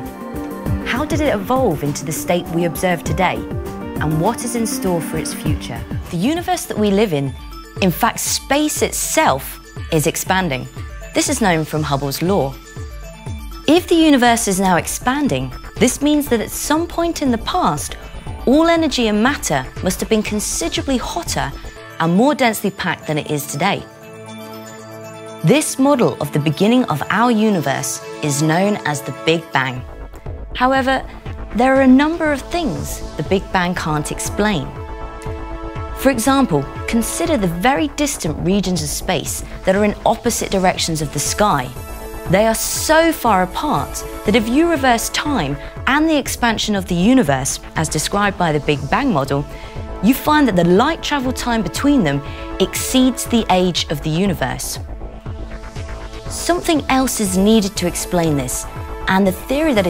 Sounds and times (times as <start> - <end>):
Music: 0.0 - 59.9
Speech: 0.9 - 3.4, 4.0 - 12.6, 13.7 - 23.8, 25.5 - 29.9, 30.6 - 31.0, 31.6 - 34.8, 36.0 - 54.8, 56.4 - 59.9.